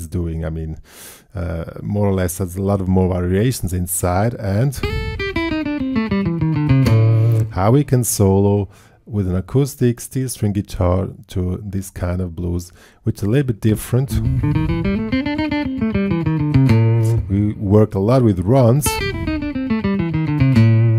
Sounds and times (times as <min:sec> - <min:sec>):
Speech: 0:00.0 - 0:00.8, 0:01.4 - 0:04.8, 0:07.4 - 0:14.3, 0:17.0 - 0:19.0
Guitar: 0:04.8 - 0:07.8, 0:13.7 - 0:20.9.